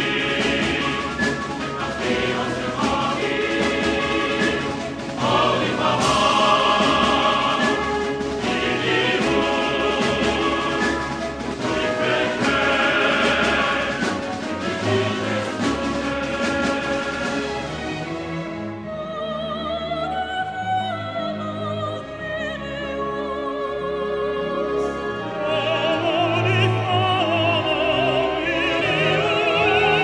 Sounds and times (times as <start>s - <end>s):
Music: 0.0s - 30.0s.